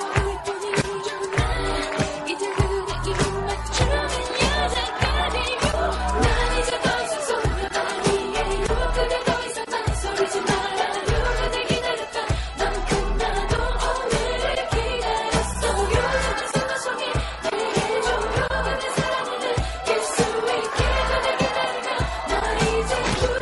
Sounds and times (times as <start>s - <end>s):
Music of Asia: 0.0s - 23.4s
Singing: 0.0s - 23.4s.